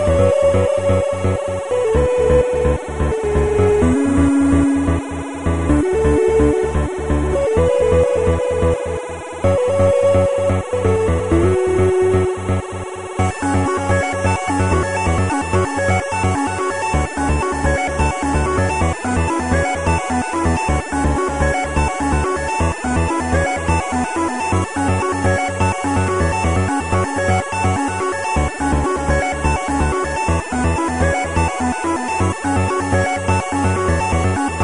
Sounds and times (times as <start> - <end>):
Music: 0.0 - 34.6.